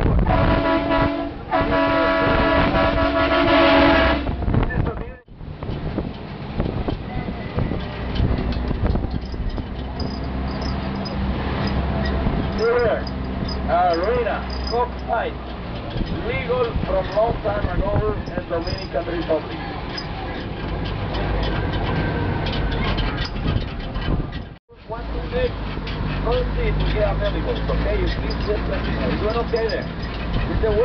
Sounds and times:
Truck: 2.5s - 30.8s
Speech: 4.7s - 5.3s, 12.6s - 13.1s, 13.7s - 15.4s, 16.2s - 19.6s, 24.7s - 25.6s, 26.2s - 29.9s, 30.5s - 30.8s.

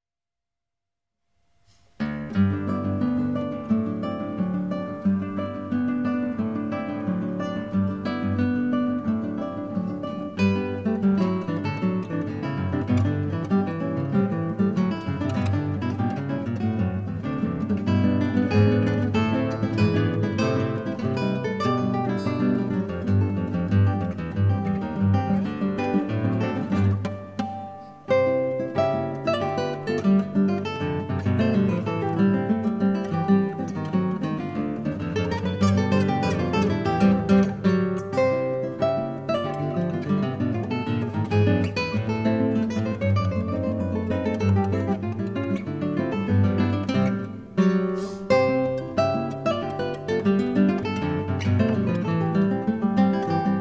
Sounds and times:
Strum: 1.6s - 53.6s.

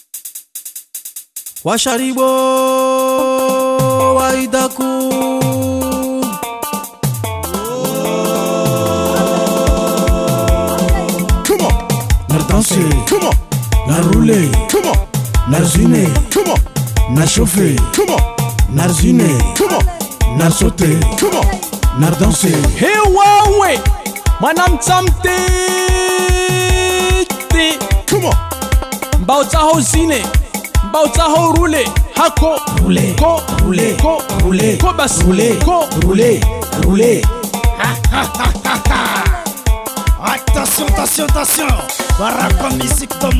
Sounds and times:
Music: 0.0s - 43.3s.

